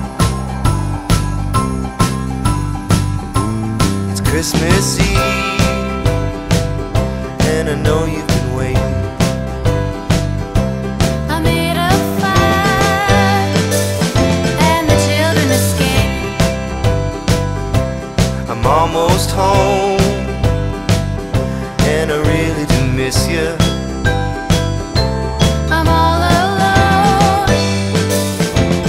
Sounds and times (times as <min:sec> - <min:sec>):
Music: 0:00.0 - 0:28.8.